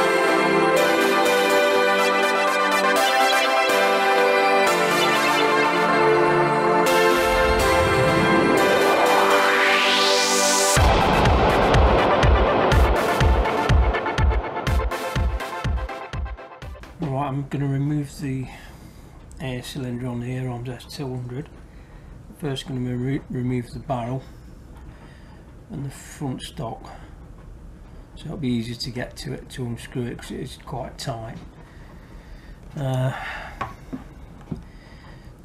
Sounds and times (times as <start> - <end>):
Music: 0.0 - 18.2
Speech: 17.0 - 18.6, 19.4 - 21.5, 22.3 - 24.3, 25.7 - 27.1, 28.2 - 31.4, 32.8 - 33.2.